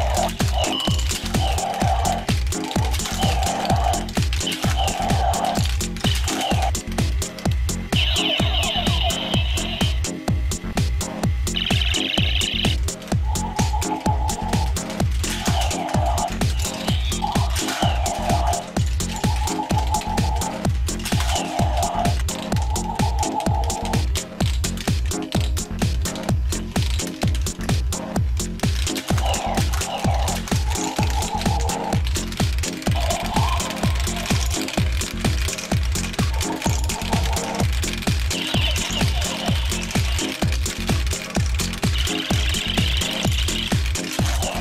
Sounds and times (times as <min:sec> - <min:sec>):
Techno: 0:00.0 - 0:44.6.